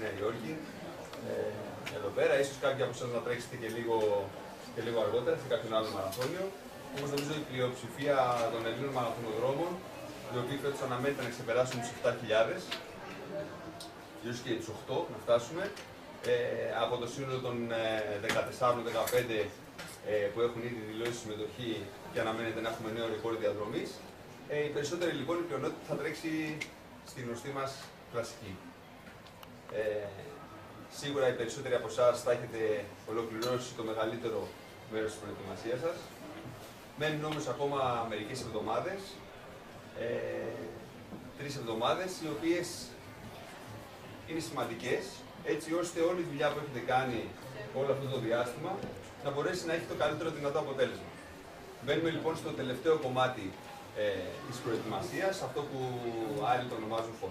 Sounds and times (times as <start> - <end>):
Speech: 0.0 - 28.8, 29.7 - 57.3.